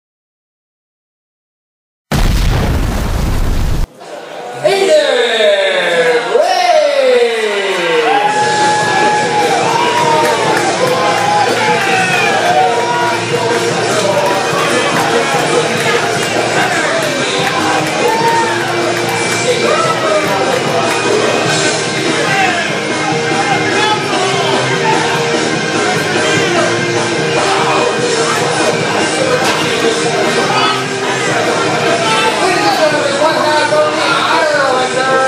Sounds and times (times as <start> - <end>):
Boom: 2.1 - 3.9
Speech: 4.4 - 8.0, 31.9 - 35.2
Music: 7.0 - 35.2.